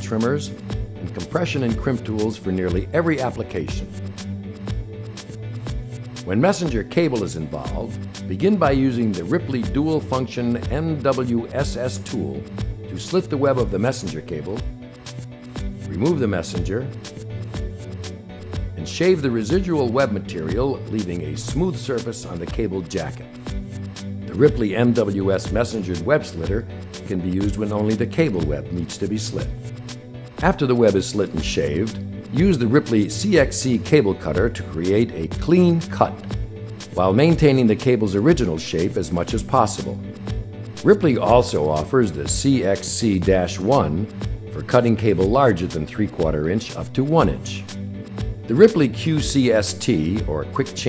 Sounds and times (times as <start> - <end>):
Speech: 0.0 - 4.0, 6.2 - 14.7, 15.8 - 17.0, 18.8 - 23.3, 24.3 - 29.6, 30.4 - 36.4, 37.0 - 40.1, 40.8 - 47.7, 48.5 - 50.8
Music: 0.0 - 50.8.